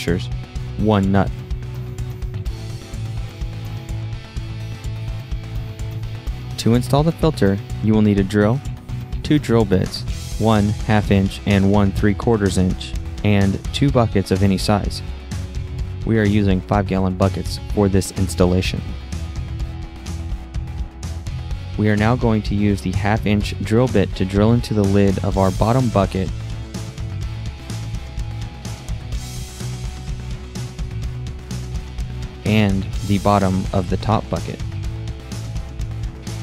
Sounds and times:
Speech: 0.0s - 1.4s, 6.6s - 15.1s, 16.0s - 19.0s, 21.8s - 26.3s, 32.4s - 34.6s
Music: 0.0s - 36.4s.

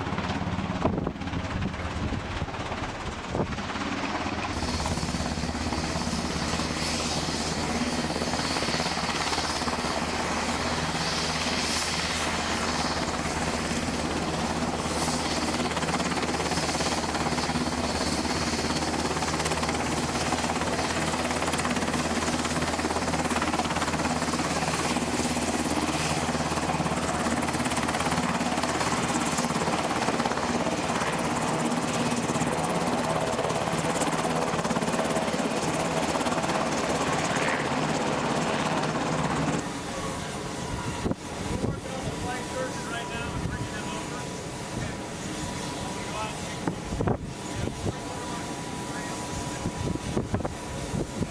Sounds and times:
Helicopter: 0.0s - 51.3s.

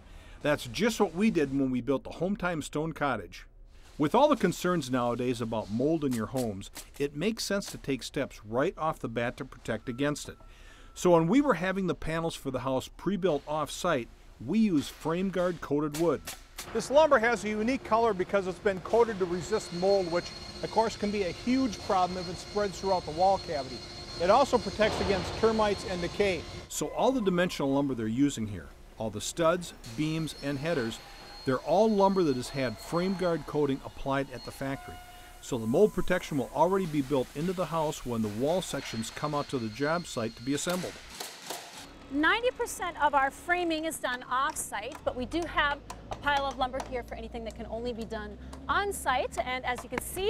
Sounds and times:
Speech: 16.8s - 40.9s.

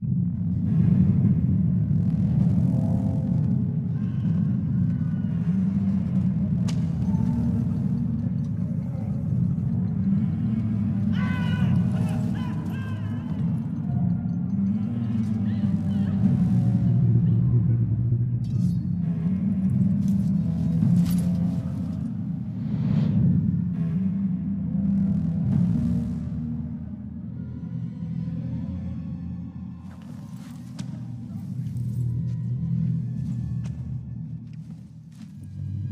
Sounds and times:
Music: 0.0s - 35.9s.

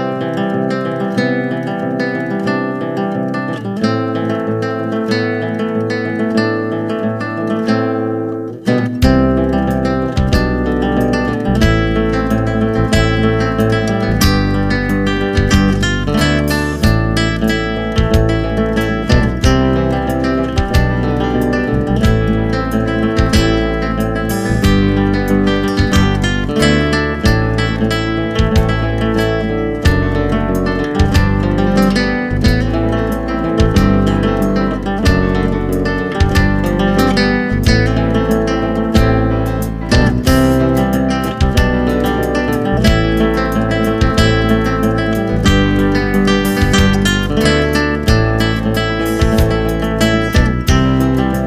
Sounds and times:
Music: 0.0s - 51.4s.

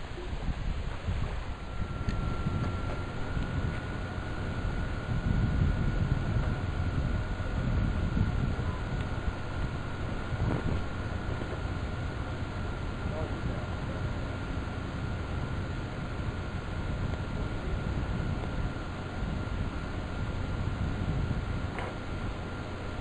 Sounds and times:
Boat, Water vehicle: 0.0s - 23.0s.

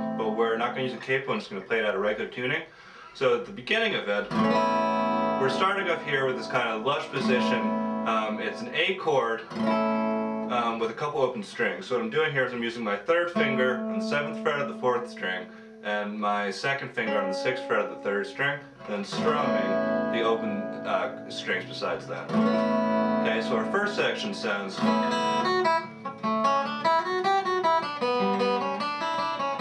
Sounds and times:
Acoustic guitar: 0.0s - 2.3s, 3.0s - 29.6s
Speech: 0.2s - 4.4s, 5.4s - 9.5s, 10.5s - 22.4s, 23.2s - 25.0s.

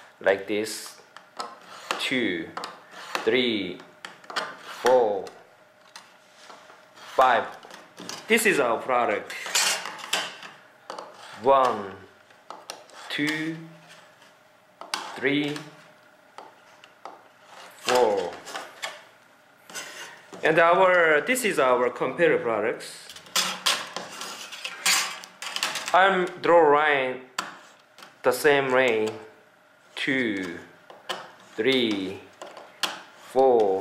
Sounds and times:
Speech: 0.2s - 1.0s, 2.0s - 2.6s, 3.2s - 3.9s, 4.8s - 5.4s, 7.2s - 7.6s, 8.3s - 9.3s, 11.4s - 12.1s, 13.1s - 13.8s, 15.2s - 15.8s, 17.9s - 18.5s, 20.4s - 23.1s, 25.9s - 27.3s, 28.2s - 29.3s, 30.0s - 30.7s, 31.6s - 32.3s, 33.3s - 33.8s.

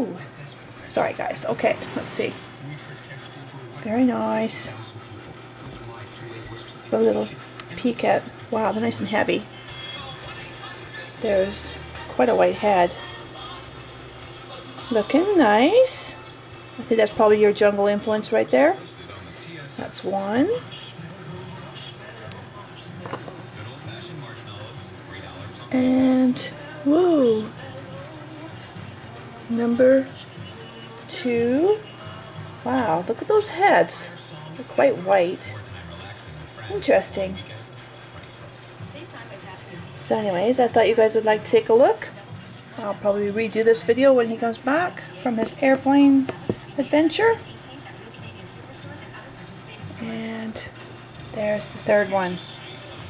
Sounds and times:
Speech: 0.0s - 9.5s, 11.2s - 13.0s, 14.6s - 16.2s, 16.8s - 28.6s, 29.5s - 30.3s, 31.1s - 32.0s, 32.6s - 52.8s
Inside, small room: 0.0s - 53.1s
Music: 0.0s - 53.1s.

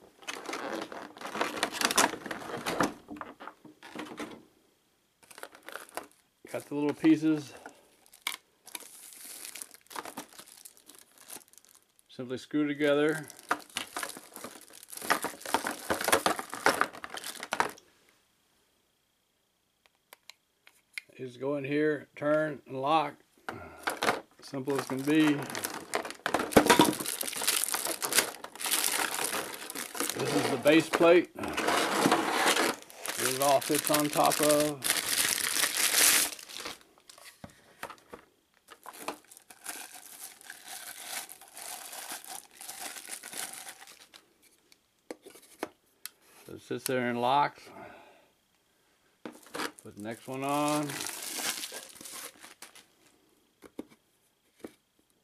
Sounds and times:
Speech: 6.5s - 7.6s, 12.1s - 13.3s, 21.1s - 23.2s, 24.4s - 25.5s, 30.2s - 31.5s, 33.2s - 34.8s, 46.5s - 47.7s, 49.8s - 51.0s.

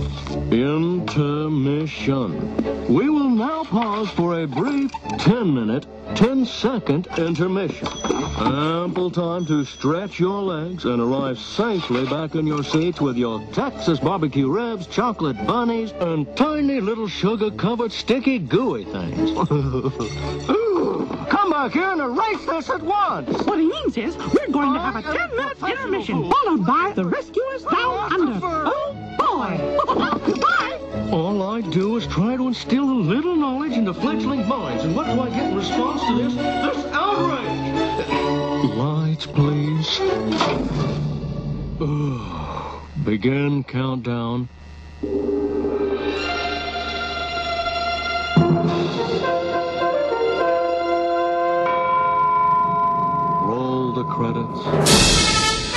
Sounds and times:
Speech: 8.4s - 19.3s, 30.6s - 37.5s, 43.0s - 44.5s, 53.4s - 54.8s.

